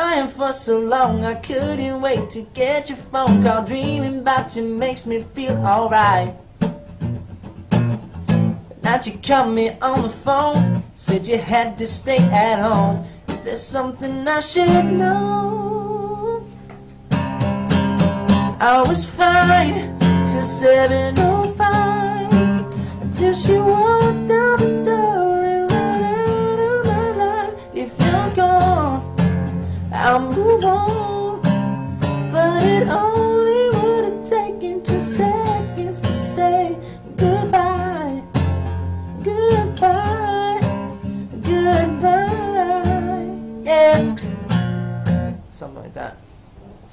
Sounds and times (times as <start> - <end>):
Male singing: 0.0 - 6.4, 8.8 - 16.5, 18.5 - 29.2, 29.9 - 31.6, 32.3 - 38.3, 39.2 - 44.2
Music: 0.0 - 45.5.